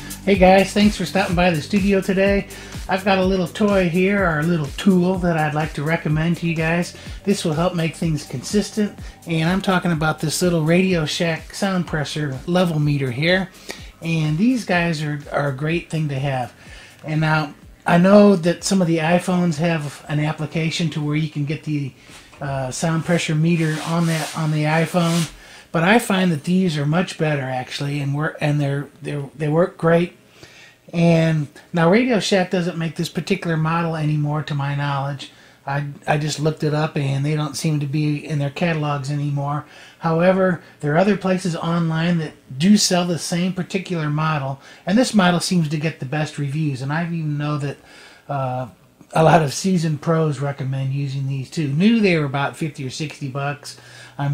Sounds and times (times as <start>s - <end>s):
Speech: 0.0s - 30.2s, 30.9s - 54.3s.